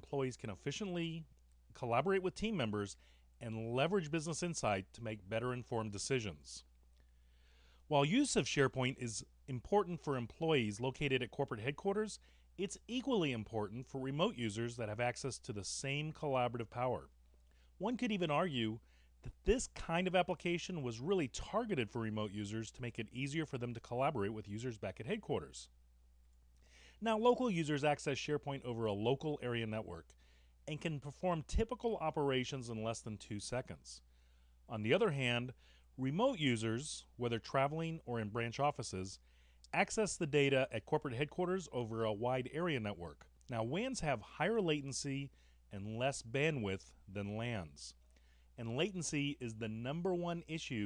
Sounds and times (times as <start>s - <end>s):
Speech: 0.0s - 6.7s, 7.9s - 17.2s, 17.8s - 25.7s, 27.0s - 34.1s, 34.7s - 48.0s, 48.6s - 50.8s.